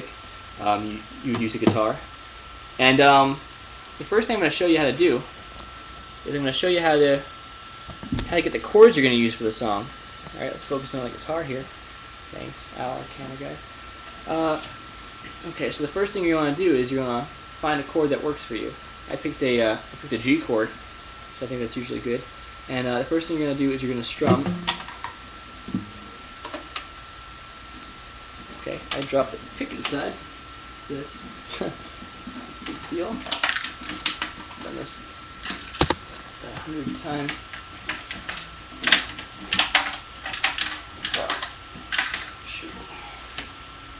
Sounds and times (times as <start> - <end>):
Speech: 0.0 - 2.1, 2.8 - 3.4, 4.0 - 5.3, 6.2 - 7.3, 8.2 - 11.7, 12.3 - 13.6, 14.3 - 20.8, 21.4 - 24.6, 28.6 - 30.2, 30.9 - 31.9, 32.7 - 33.4, 34.6 - 35.1, 36.4 - 37.4, 41.1 - 41.4, 42.4 - 43.2.